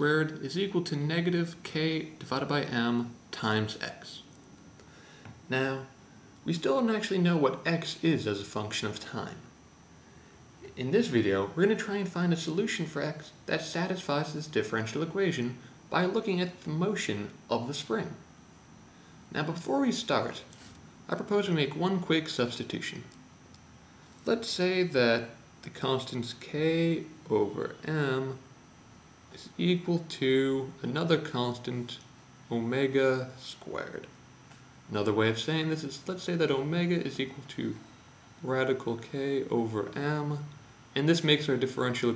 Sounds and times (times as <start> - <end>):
Speech: 0.0 - 4.4, 5.5 - 9.5, 10.6 - 18.3, 19.3 - 23.2, 24.2 - 28.5, 29.3 - 34.2, 34.9 - 37.8, 38.4 - 42.1.